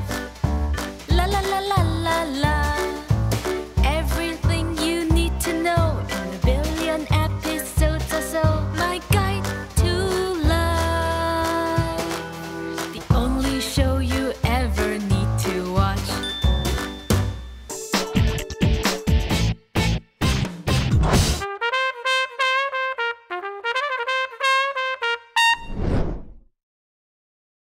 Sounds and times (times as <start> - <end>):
Brass instrument: 21.2 - 25.8.